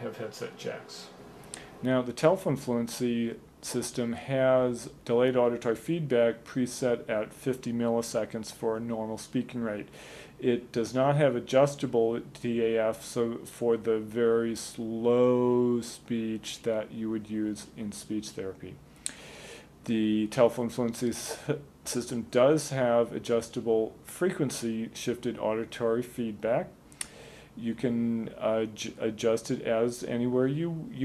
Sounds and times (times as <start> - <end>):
Speech: 0.0 - 1.2, 1.8 - 18.8, 19.8 - 26.8, 27.6 - 31.0.